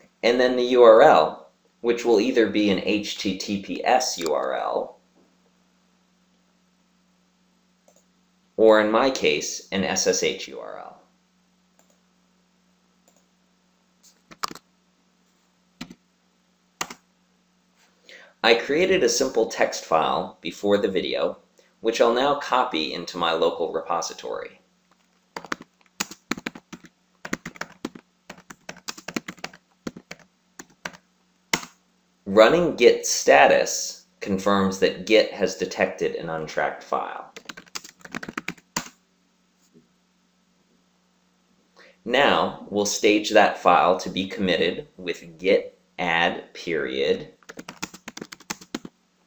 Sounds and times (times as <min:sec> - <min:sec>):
Speech: 0:00.2 - 0:05.0, 0:08.6 - 0:11.1, 0:18.4 - 0:24.6, 0:32.3 - 0:37.4, 0:42.0 - 0:47.4.